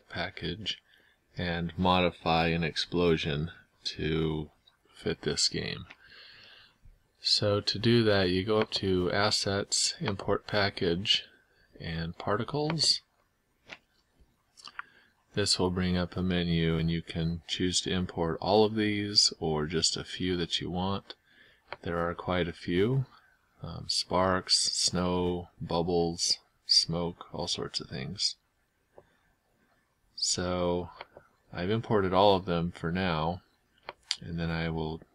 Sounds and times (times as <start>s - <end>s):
Speech: 0.0s - 0.8s, 1.4s - 5.9s, 7.2s - 13.1s, 15.4s - 21.2s, 21.8s - 28.4s, 30.2s - 33.5s, 34.1s - 35.1s.